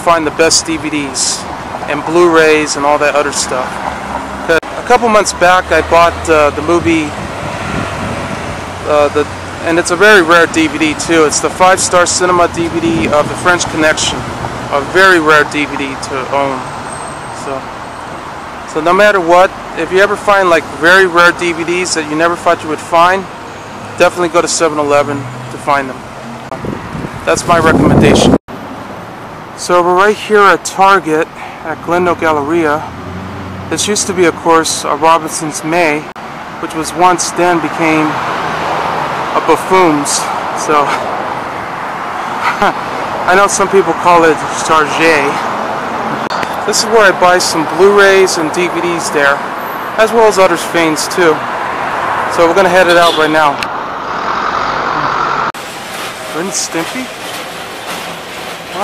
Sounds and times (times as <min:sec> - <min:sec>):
Speech: 0:00.0 - 0:03.7, 0:04.5 - 0:07.2, 0:08.8 - 0:16.7, 0:17.4 - 0:17.7, 0:18.7 - 0:23.3, 0:24.0 - 0:26.0, 0:27.3 - 0:28.4, 0:29.6 - 0:32.9, 0:33.7 - 0:38.2, 0:39.4 - 0:41.0, 0:42.6 - 0:45.4, 0:46.6 - 0:49.4, 0:50.0 - 0:51.4, 0:52.3 - 0:53.6, 0:56.4 - 0:57.1
Outside, urban or manmade: 0:00.0 - 0:58.8
Traffic noise, roadway noise: 0:00.0 - 0:58.8.